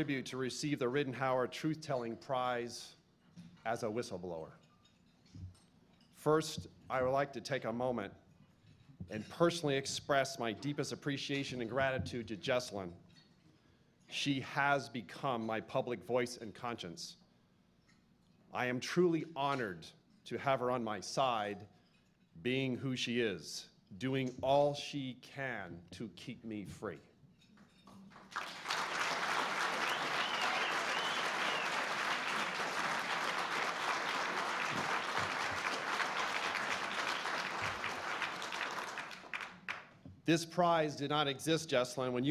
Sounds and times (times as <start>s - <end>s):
Male speech, man speaking: 0.0s - 3.0s, 3.7s - 4.6s, 6.2s - 8.2s, 9.1s - 13.0s, 14.1s - 17.2s, 18.5s - 21.7s, 22.4s - 27.1s, 40.3s - 42.3s
Narration, monologue: 0.0s - 28.2s, 39.2s - 42.3s.